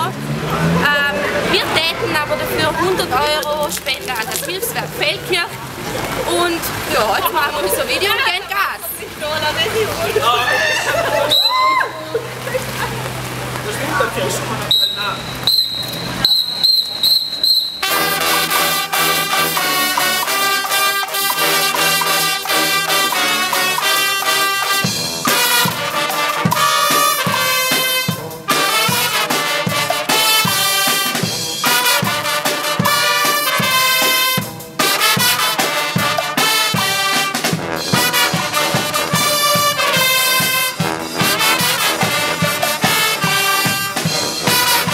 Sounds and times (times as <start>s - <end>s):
Speech: 0.0s - 5.6s.